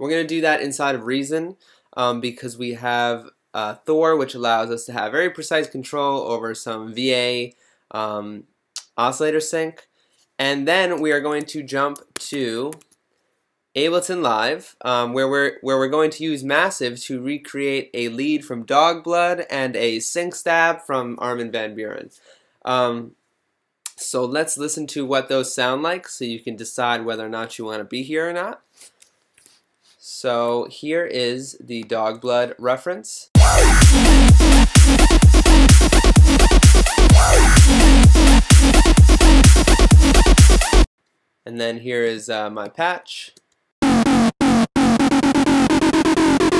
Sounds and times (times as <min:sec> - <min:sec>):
Speech: 0:00.0 - 0:09.8, 0:10.4 - 0:12.8, 0:13.8 - 0:23.1, 0:23.9 - 0:28.6, 0:30.0 - 0:33.3, 0:41.5 - 0:43.4.